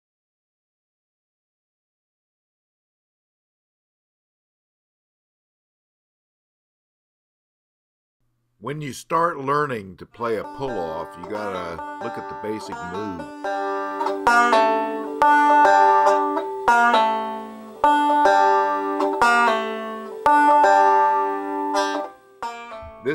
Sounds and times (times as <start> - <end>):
Speech: 8.6 - 13.3.